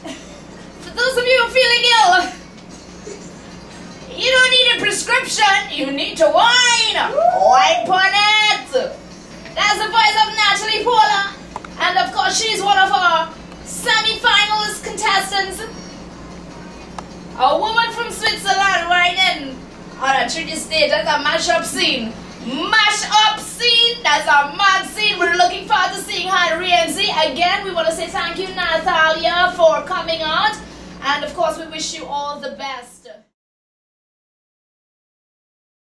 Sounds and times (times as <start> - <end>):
Speech: 4.1 - 9.0, 9.6 - 15.7, 17.4 - 33.4.